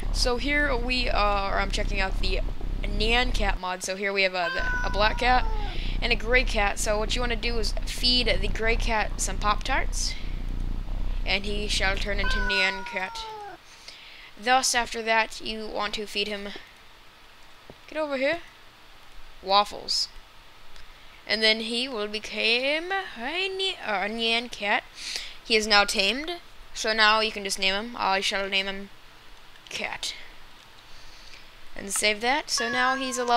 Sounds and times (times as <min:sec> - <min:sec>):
Speech: 0:00.0 - 0:10.3, 0:11.3 - 0:13.4, 0:14.4 - 0:16.6, 0:17.9 - 0:18.5, 0:19.4 - 0:20.2, 0:21.3 - 0:28.9, 0:29.7 - 0:30.3, 0:31.8 - 0:33.3.